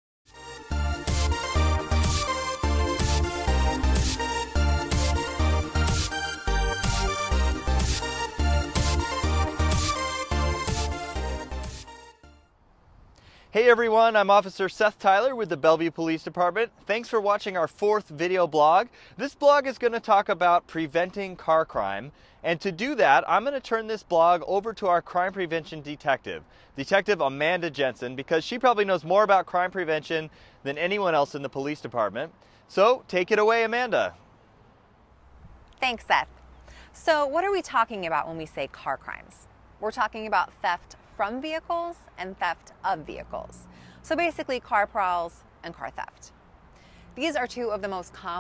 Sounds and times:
Speech: 13.6s - 34.2s, 35.8s - 36.3s, 37.0s - 46.3s, 47.2s - 48.4s.

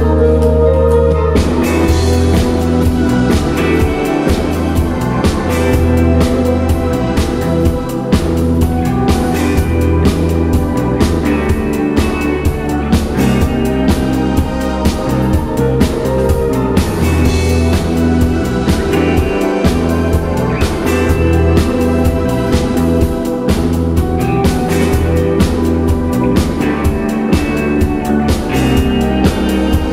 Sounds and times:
Music: 0.0s - 29.9s.

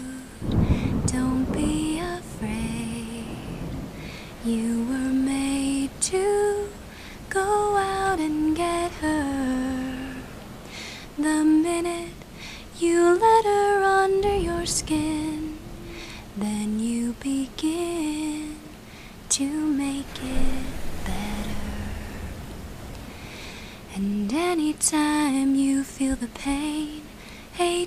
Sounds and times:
Lullaby: 0.0s - 22.4s, 23.2s - 27.8s.

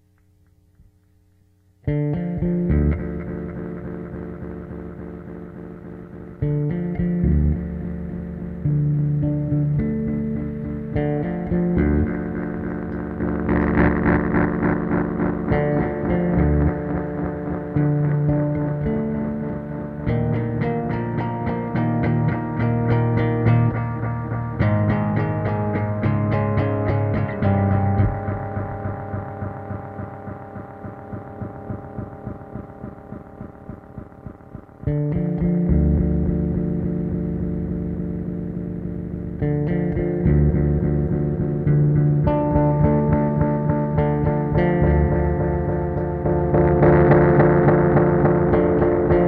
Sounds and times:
Distortion: 0.0s - 49.2s
Bass guitar: 1.8s - 49.2s.

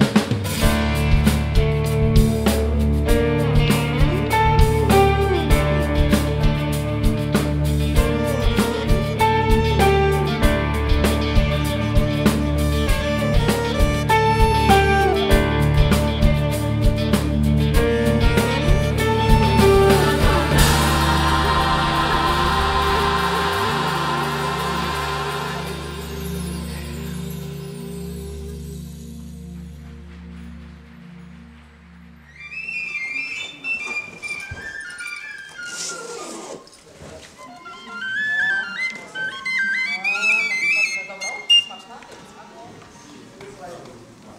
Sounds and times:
Music: 0.0s - 36.7s, 37.4s - 41.9s.

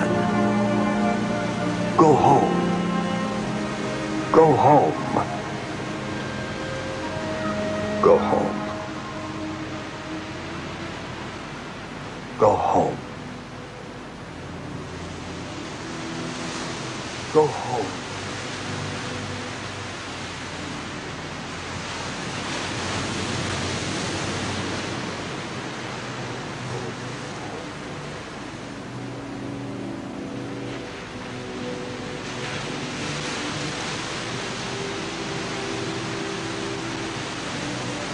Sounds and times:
Music: 0.0s - 38.1s
Speech: 2.0s - 2.6s, 4.3s - 5.4s, 8.0s - 8.6s, 12.4s - 13.0s, 17.3s - 18.0s.

